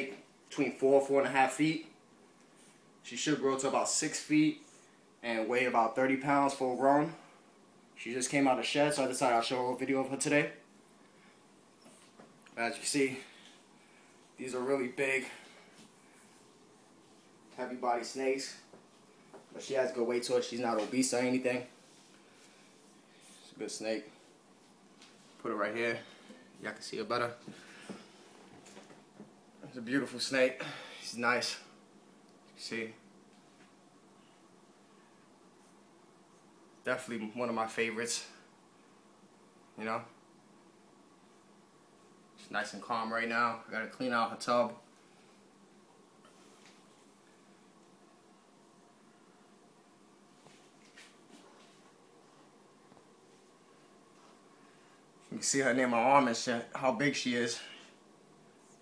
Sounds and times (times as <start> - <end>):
Speech: 0.0 - 2.0, 3.0 - 7.3, 8.0 - 10.6, 12.6 - 13.4, 14.4 - 15.4, 17.6 - 18.7, 19.5 - 21.8, 23.4 - 24.2, 25.4 - 27.5, 29.6 - 31.8, 32.6 - 33.0, 36.8 - 38.4, 39.8 - 40.2, 42.4 - 44.8, 55.3 - 57.9.